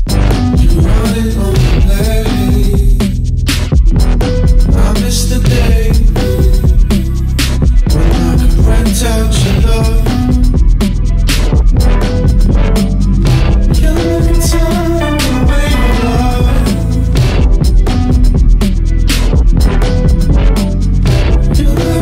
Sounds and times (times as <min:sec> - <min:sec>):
Grunge: 0:00.0 - 0:22.0.